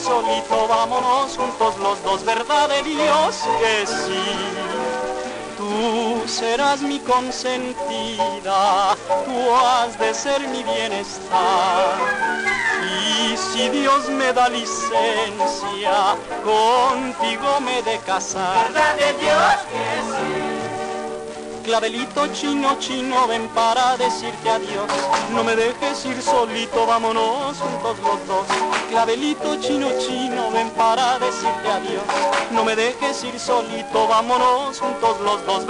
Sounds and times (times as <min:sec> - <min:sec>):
Folk music: 0:00.0 - 0:35.6.